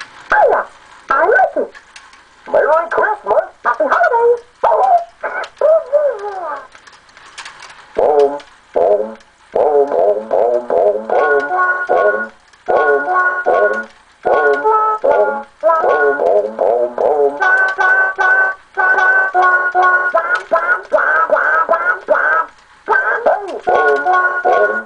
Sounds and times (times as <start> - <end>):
Music: 8.0 - 24.8.